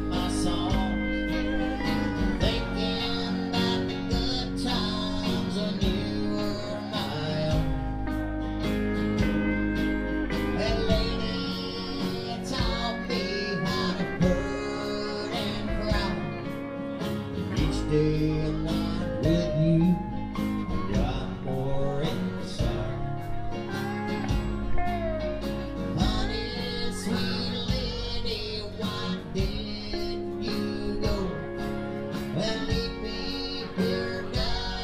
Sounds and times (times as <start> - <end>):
Country: 0.0 - 34.8.